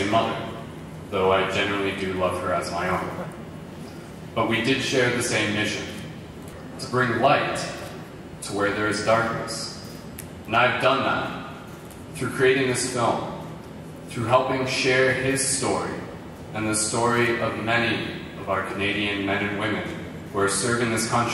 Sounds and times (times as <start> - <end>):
Male speech, man speaking: 0.0 - 3.4, 4.4 - 6.1, 6.8 - 9.8, 10.5 - 11.4, 12.2 - 13.4, 14.1 - 21.3
Narration, monologue: 0.0 - 21.3.